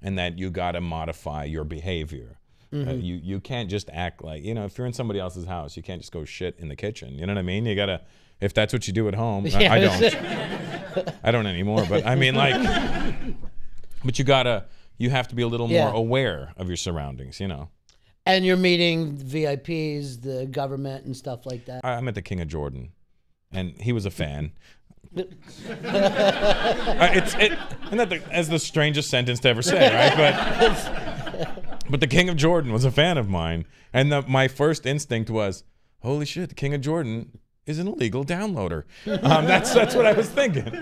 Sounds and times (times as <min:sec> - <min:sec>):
Speech: 0:00.0 - 0:10.2, 0:11.2 - 0:12.6, 0:14.0 - 0:17.7, 0:18.3 - 0:24.6, 0:27.0 - 0:30.4, 0:31.9 - 0:40.8.